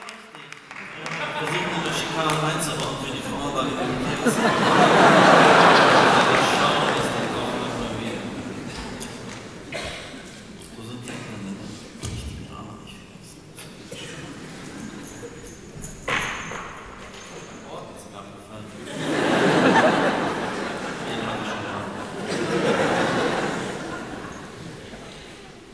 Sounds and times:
Speech: 0:00.0 - 0:04.5, 0:05.8 - 0:09.2, 0:09.8 - 0:14.4, 0:17.4 - 0:19.0, 0:20.9 - 0:22.2.

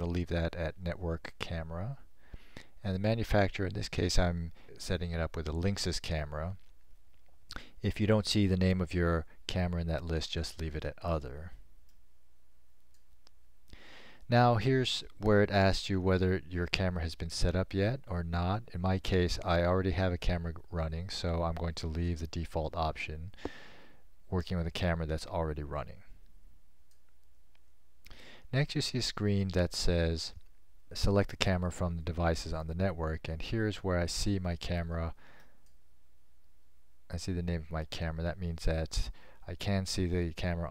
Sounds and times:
Speech: 0:00.0 - 0:02.1, 0:02.8 - 0:06.6, 0:07.8 - 0:11.6, 0:14.3 - 0:23.4, 0:24.3 - 0:26.2, 0:28.5 - 0:35.2, 0:37.1 - 0:40.7.

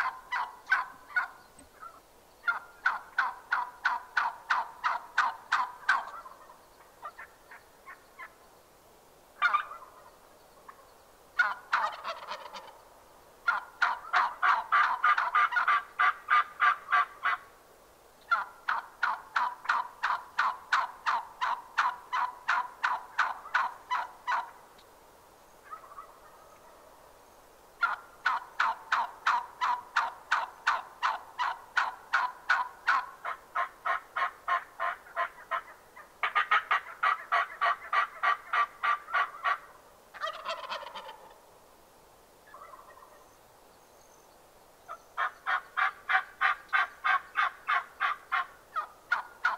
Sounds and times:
Gobble: 0:00.0 - 0:08.4, 0:09.4 - 0:10.1, 0:11.4 - 0:12.8, 0:13.4 - 0:17.5, 0:18.3 - 0:24.6, 0:25.6 - 0:26.9, 0:27.8 - 0:41.4, 0:42.5 - 0:43.2, 0:44.9 - 0:49.5.

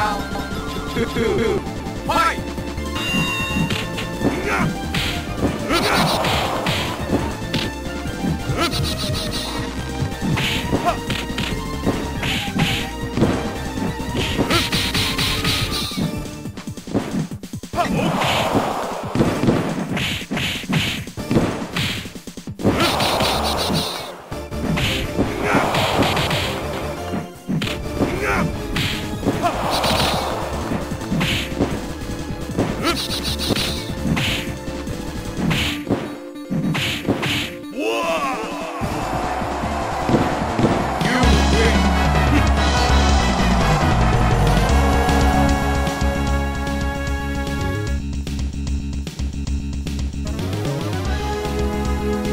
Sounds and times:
Music: 0:00.0 - 0:52.3
Speech: 0:02.1 - 0:02.4, 0:41.0 - 0:42.4.

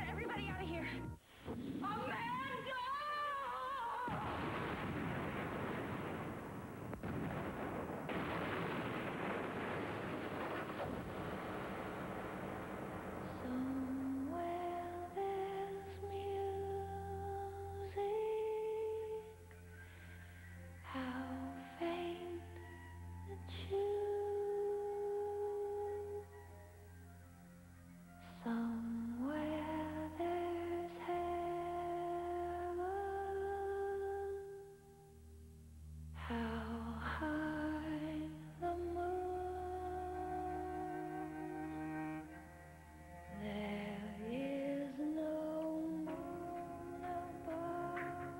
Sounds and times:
Music: 0:00.0 - 0:01.3, 0:11.3 - 0:48.3.

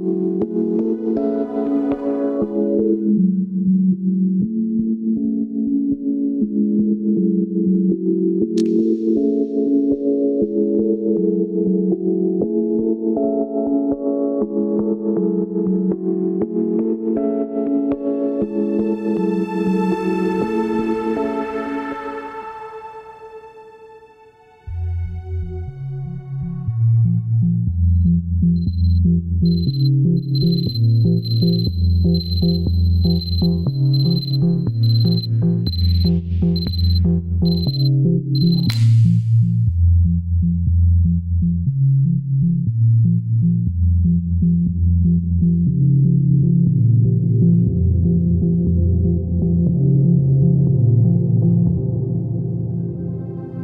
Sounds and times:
Music: 0:00.0 - 0:53.6.

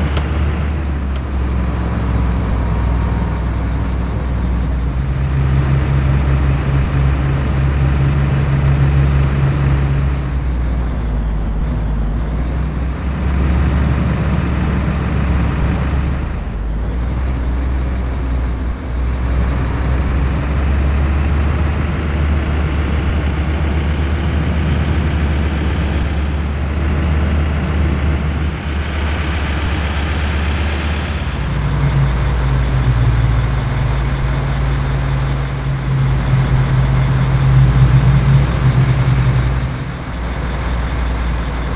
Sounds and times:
Vehicle: 0:00.0 - 0:41.7.

